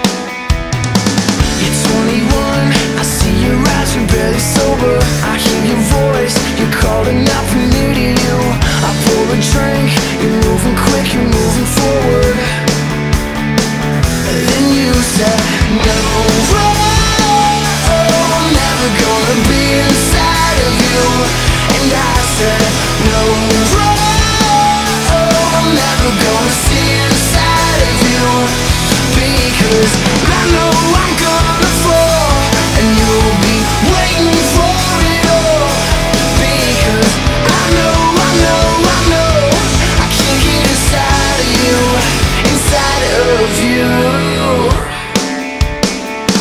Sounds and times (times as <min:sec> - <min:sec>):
Music: 0:00.0 - 0:46.4.